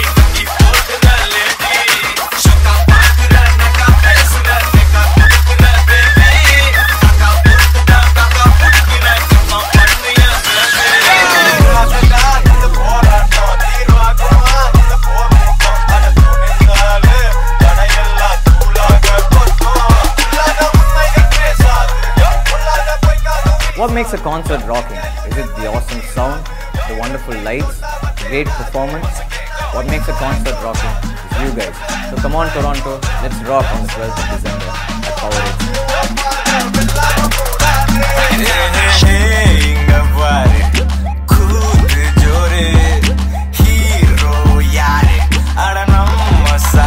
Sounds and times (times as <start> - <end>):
Music: 0.0 - 46.8
Speech: 23.8 - 29.2, 29.8 - 34.5.